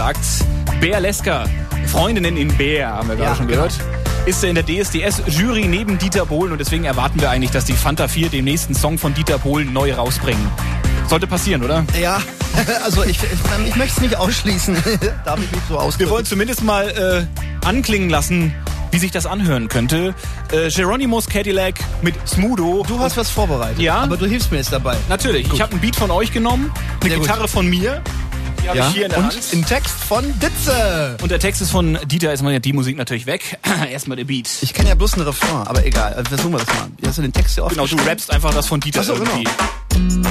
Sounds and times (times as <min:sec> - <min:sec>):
Speech: 0:00.0 - 0:28.0, 0:28.6 - 0:39.6
Music: 0:00.0 - 0:40.3.